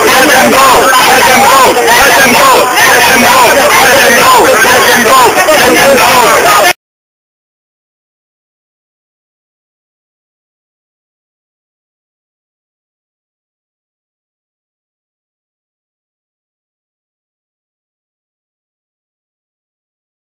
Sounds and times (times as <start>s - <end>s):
Speech: 0.0s - 6.8s.